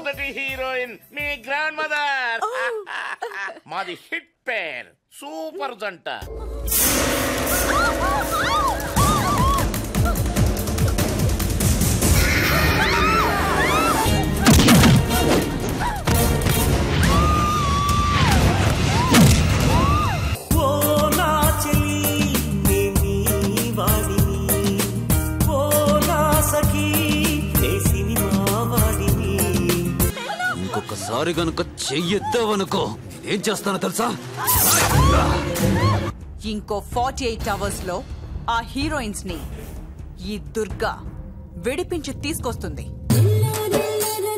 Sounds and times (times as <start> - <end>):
Music of Bollywood: 20.4 - 30.2.